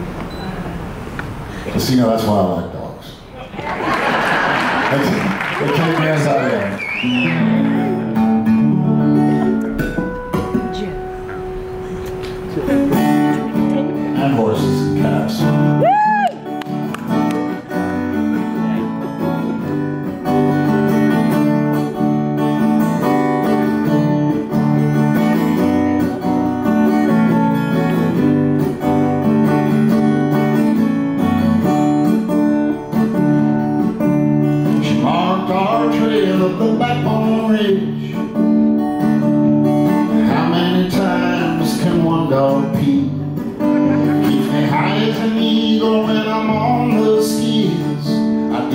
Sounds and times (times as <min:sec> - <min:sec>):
Music: 0:06.8 - 0:48.7.